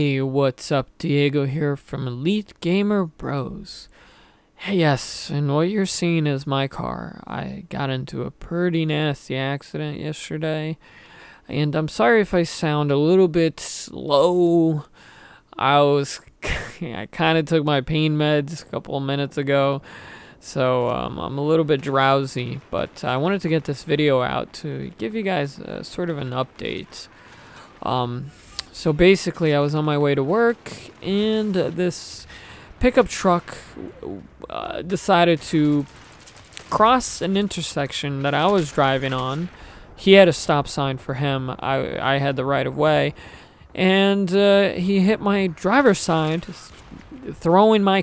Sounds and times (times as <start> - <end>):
Speech: 0.0 - 3.9, 4.6 - 10.8, 11.4 - 14.9, 15.6 - 36.0, 36.7 - 48.0.